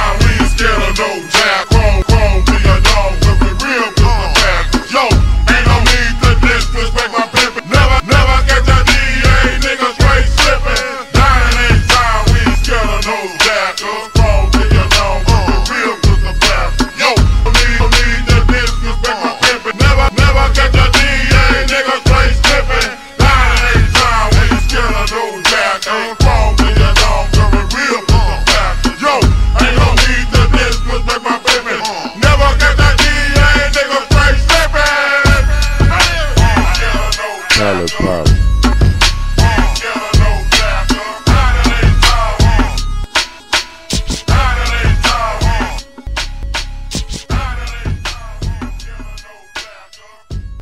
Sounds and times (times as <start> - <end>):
Music: 0.0 - 50.6.